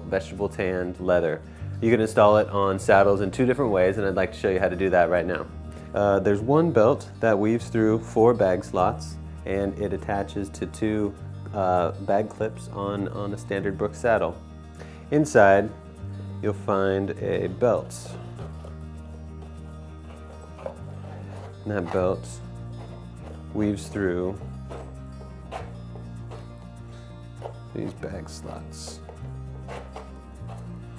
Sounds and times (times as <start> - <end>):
Speech: 0.0 - 14.4, 15.1 - 15.8, 16.4 - 18.2, 21.6 - 22.4, 23.5 - 24.4, 27.7 - 29.0
Music: 0.0 - 30.9.